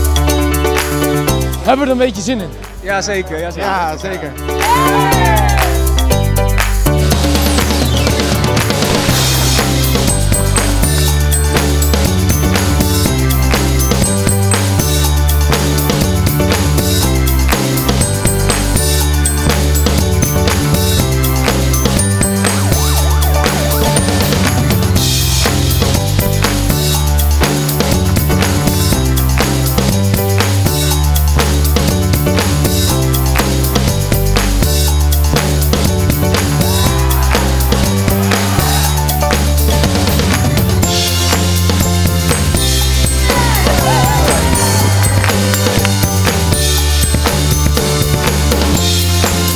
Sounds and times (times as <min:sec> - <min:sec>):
Music: 0:00.0 - 0:49.5.